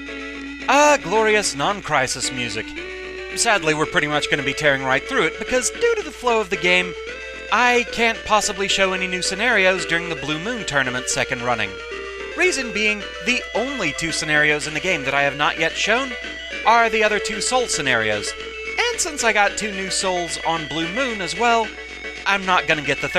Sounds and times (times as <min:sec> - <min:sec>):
Speech: 0:00.7 - 0:02.8, 0:03.4 - 0:06.9, 0:07.5 - 0:11.8, 0:12.4 - 0:21.7, 0:22.3 - 0:23.1.